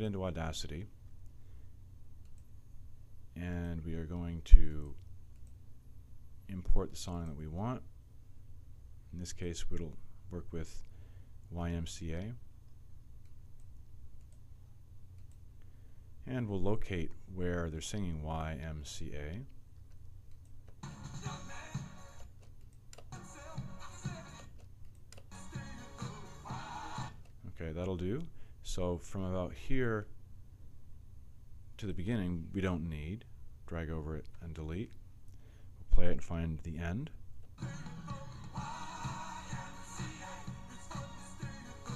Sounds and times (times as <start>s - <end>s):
Speech: 0.0s - 0.9s, 3.4s - 5.0s, 6.5s - 7.9s, 9.1s - 10.8s, 11.5s - 12.4s, 16.2s - 19.6s, 27.4s - 30.1s, 31.8s - 35.0s, 35.9s - 37.2s
Music: 20.8s - 22.3s, 23.1s - 24.6s, 25.3s - 27.3s, 37.6s - 41.9s.